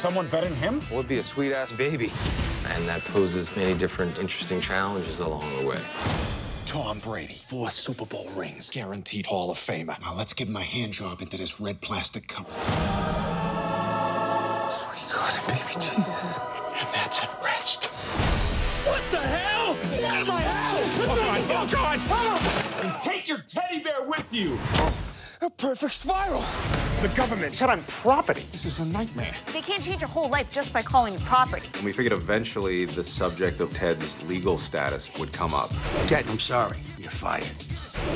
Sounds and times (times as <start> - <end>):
Music: 0.0 - 8.1, 12.4 - 22.9, 26.0 - 38.1
Speech: 6.7 - 12.5.